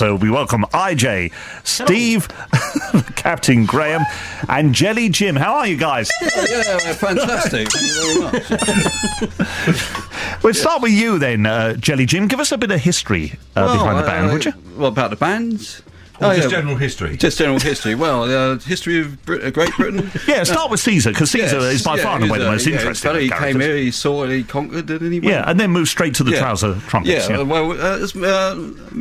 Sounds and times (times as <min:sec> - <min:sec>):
Speech: 0:00.0 - 0:02.3, 0:03.0 - 0:08.4, 0:10.4 - 0:29.0.